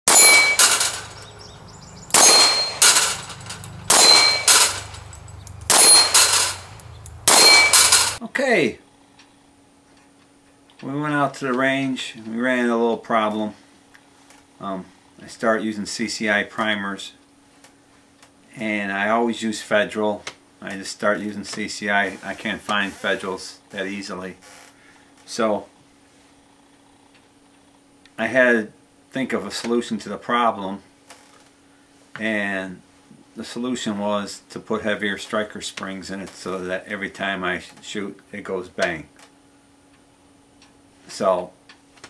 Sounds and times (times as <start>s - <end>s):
Clang: 0.1s - 1.3s, 2.1s - 6.7s, 7.3s - 8.2s.